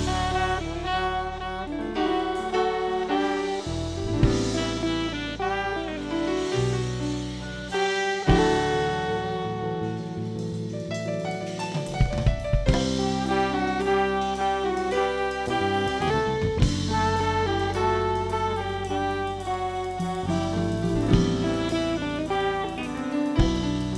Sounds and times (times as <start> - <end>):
Musical instrument: 0.0 - 23.9.